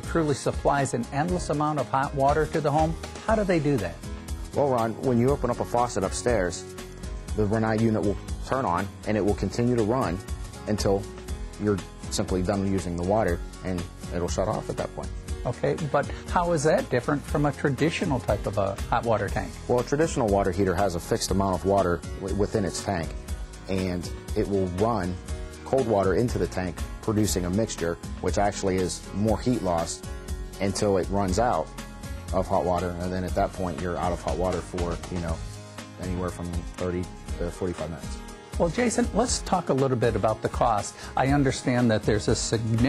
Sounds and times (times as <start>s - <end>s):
Speech: 0.0s - 4.0s, 4.6s - 6.6s, 7.4s - 23.1s, 23.7s - 30.0s, 30.6s - 31.7s, 32.3s - 35.4s, 36.0s - 42.8s
Music: 0.0s - 42.8s.